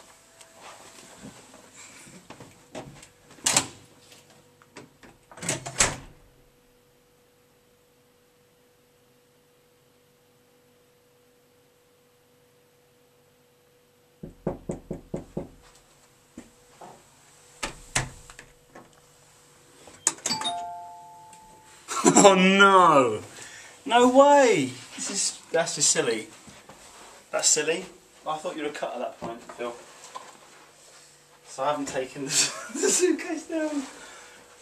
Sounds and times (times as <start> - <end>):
Inside, small room: 0.0 - 34.6
Doorbell: 20.3 - 21.9
Speech: 22.1 - 26.4, 27.3 - 29.9, 31.5 - 34.0.